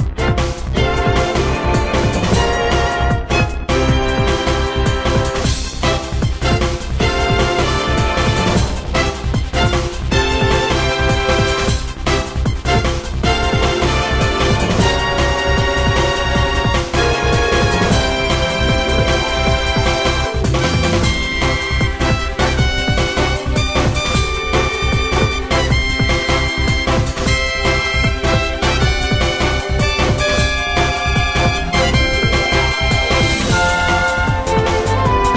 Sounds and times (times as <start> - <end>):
Music: 0.0 - 35.3.